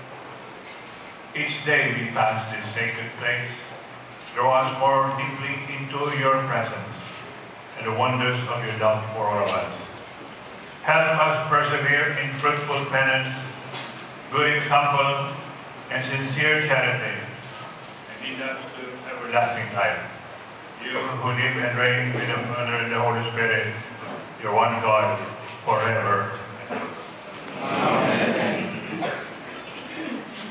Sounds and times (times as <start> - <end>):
Speech: 1.4 - 3.8, 4.4 - 7.2, 7.8 - 10.0, 10.8 - 13.6, 14.3 - 17.4, 18.1 - 20.2, 20.8 - 27.0.